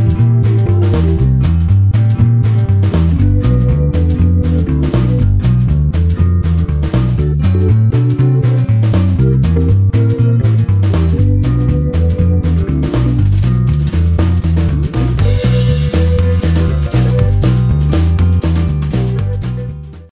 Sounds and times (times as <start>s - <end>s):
Music: 0.0s - 20.1s.